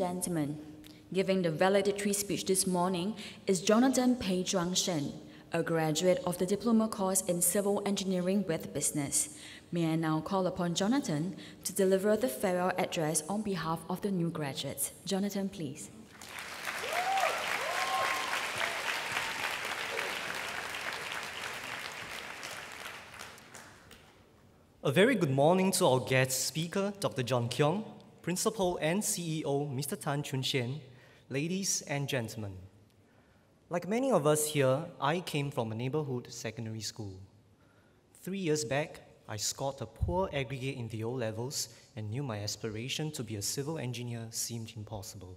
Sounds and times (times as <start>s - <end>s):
Narration, monologue: 0.0s - 16.3s, 23.7s - 45.3s
Male speech, man speaking: 24.8s - 32.6s, 33.7s - 37.2s, 38.2s - 45.3s.